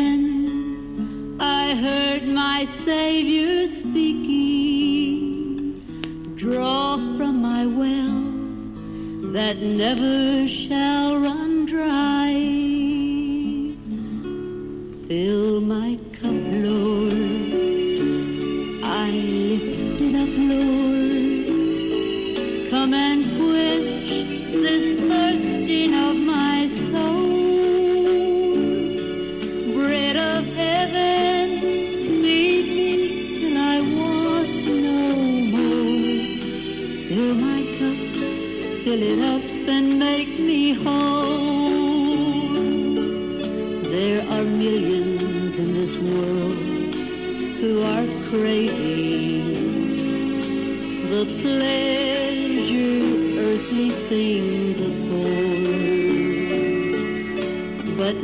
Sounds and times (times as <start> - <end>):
Music: 0.0 - 58.2.